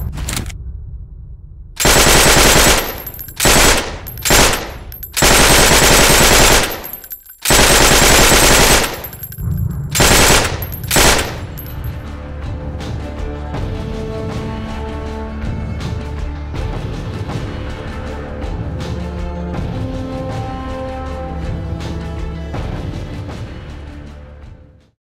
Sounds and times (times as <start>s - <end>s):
Music: 0.0s - 5.0s, 9.1s - 25.0s.